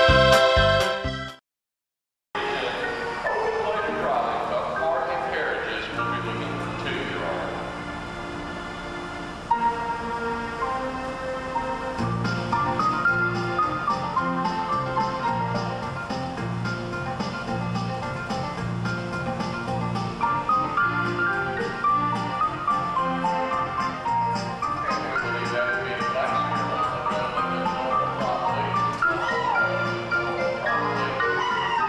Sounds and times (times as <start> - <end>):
Music: 0.0 - 1.4, 2.4 - 31.8
Speech: 2.4 - 7.7, 24.8 - 31.4.